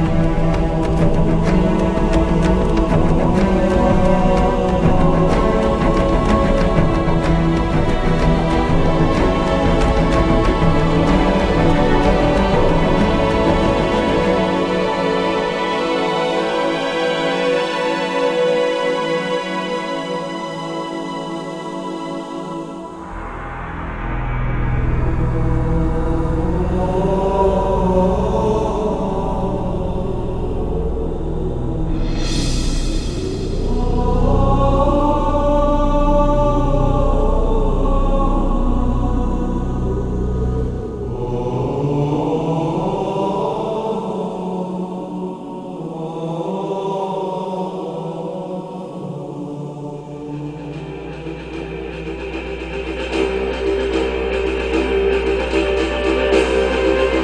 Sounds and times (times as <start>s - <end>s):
New-age music: 0.0s - 57.2s.